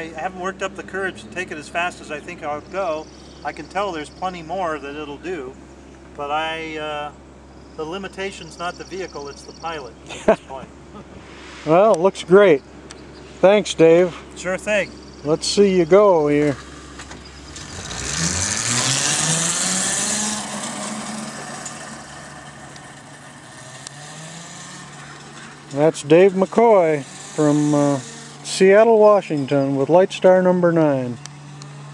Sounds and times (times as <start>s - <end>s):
Speech: 0.0s - 5.6s, 6.2s - 7.1s, 7.8s - 10.7s, 13.4s - 16.6s, 25.7s - 31.2s
Vehicle: 0.0s - 31.9s.